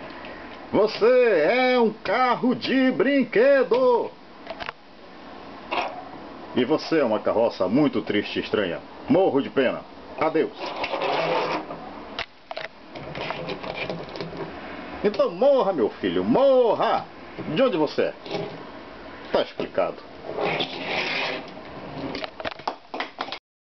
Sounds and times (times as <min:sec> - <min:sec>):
Speech: 0:00.7 - 0:04.2, 0:06.6 - 0:10.6, 0:15.0 - 0:18.2, 0:19.3 - 0:20.0.